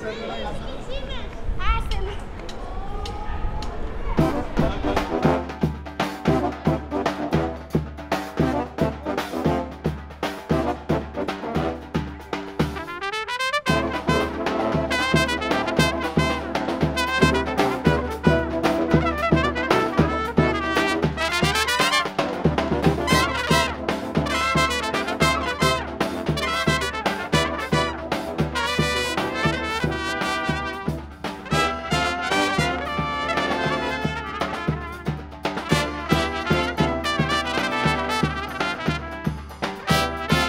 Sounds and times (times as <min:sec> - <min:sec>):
Speech: 0:00.0 - 0:05.2
Orchestra: 0:03.8 - 0:40.4
Trumpet: 0:04.2 - 0:40.4.